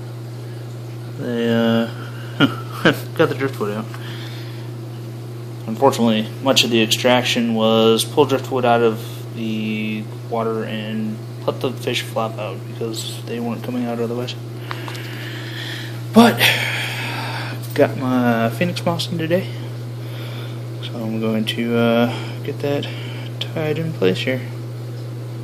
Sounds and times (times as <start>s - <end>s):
Speech: 1.2s - 2.0s, 2.8s - 3.9s, 5.6s - 14.4s, 16.1s - 16.7s, 17.7s - 19.6s, 20.8s - 24.6s.